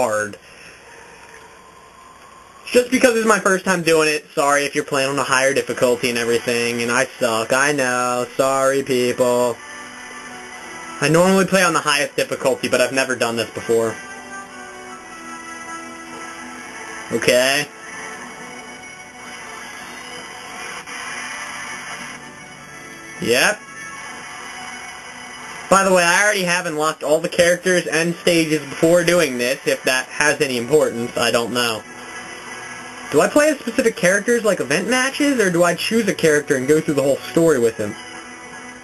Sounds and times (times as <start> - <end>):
Music: 0.0 - 38.8
Speech: 2.7 - 9.6, 11.0 - 14.0, 17.2 - 17.7, 25.8 - 31.8, 33.2 - 38.0.